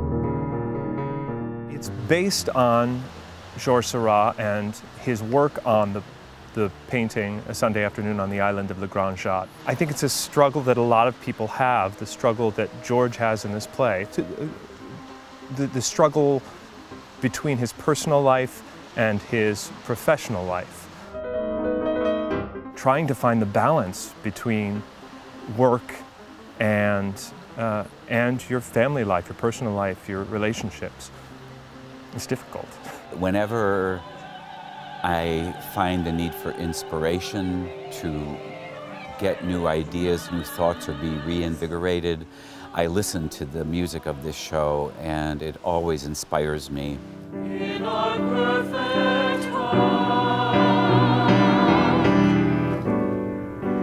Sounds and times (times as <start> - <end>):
Soundtrack music: 0.0 - 3.0, 21.0 - 23.8, 31.8 - 41.8, 47.2 - 53.8
Speech: 1.7 - 6.0, 6.6 - 14.6, 15.5 - 16.4, 17.2 - 20.8, 22.8 - 24.8, 25.5 - 26.0, 26.6 - 31.1, 32.2 - 34.0, 35.0 - 38.4, 39.2 - 47.0.